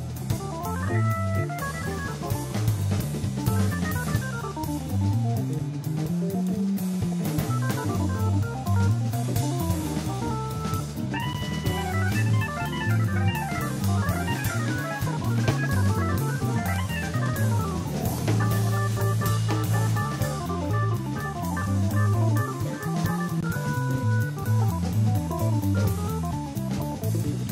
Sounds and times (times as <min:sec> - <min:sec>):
Guitar: 0:07.4 - 0:27.5.